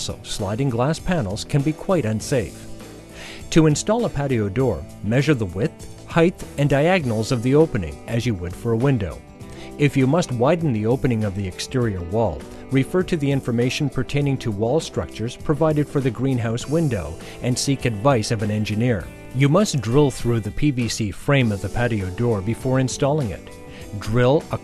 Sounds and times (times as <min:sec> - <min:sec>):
Speech: 0:00.0 - 0:02.6, 0:03.5 - 0:09.2, 0:09.8 - 0:24.6
Music: 0:00.0 - 0:24.6.